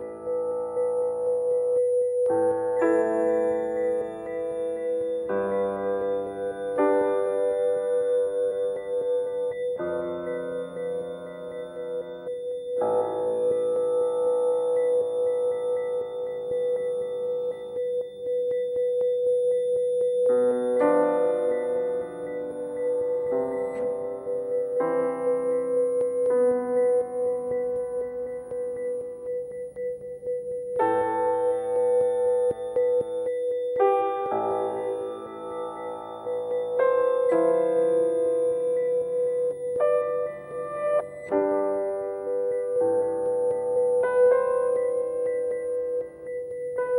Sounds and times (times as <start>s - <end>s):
Ambient music: 0.0s - 46.9s.